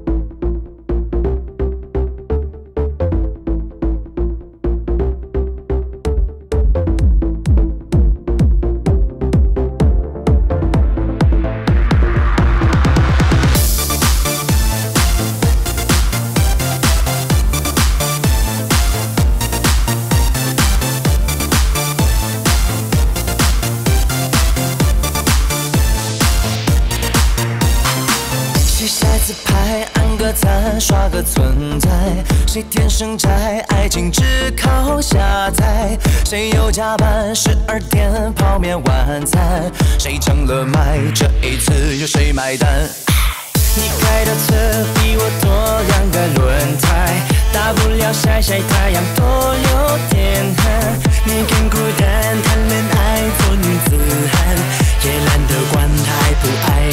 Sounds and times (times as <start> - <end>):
Exciting music: 0.0 - 56.9.